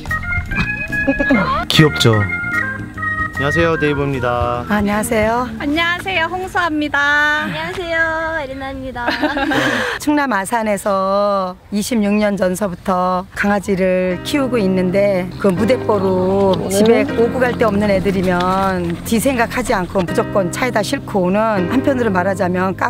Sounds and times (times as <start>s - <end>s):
Music: 0.0s - 7.0s, 14.0s - 22.9s.